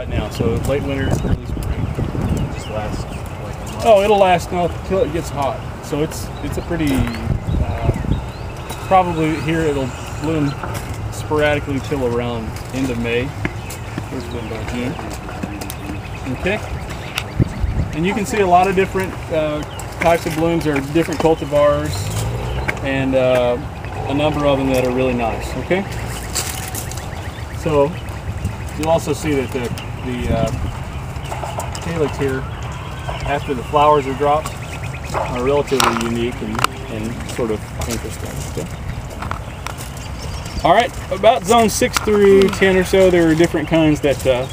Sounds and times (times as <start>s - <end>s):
Speech: 0.0s - 8.1s, 8.8s - 13.4s, 14.1s - 16.7s, 17.9s - 22.2s, 22.8s - 25.9s, 27.6s - 28.0s, 28.8s - 30.6s, 31.8s - 32.5s, 33.2s - 34.5s, 35.2s - 38.7s, 40.6s - 44.5s
Rustling leaves: 0.0s - 44.5s.